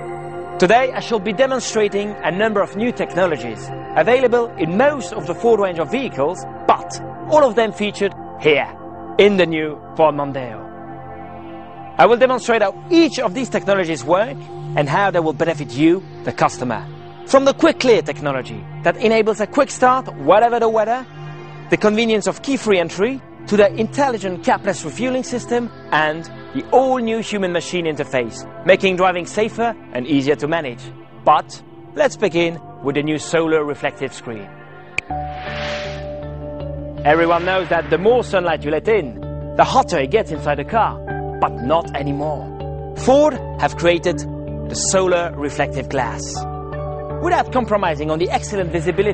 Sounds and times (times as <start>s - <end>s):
Music: 0.0s - 49.1s
Speech: 0.6s - 10.6s, 12.0s - 21.1s, 21.7s - 34.5s, 37.1s - 46.4s, 47.2s - 49.1s.